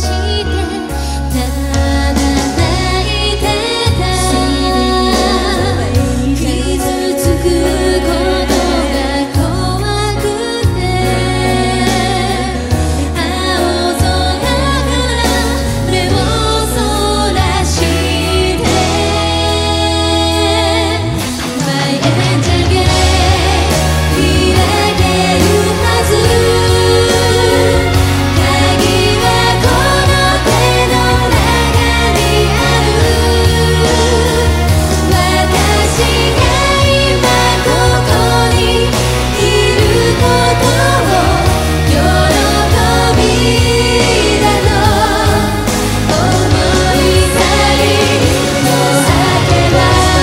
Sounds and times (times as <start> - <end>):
Singing: 0.0 - 50.2.